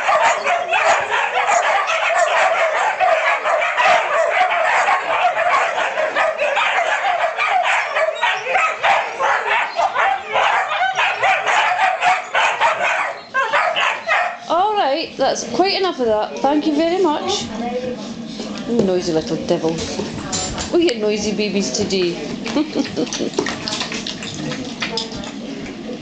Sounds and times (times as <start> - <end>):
Speech: 14.5 - 22.4.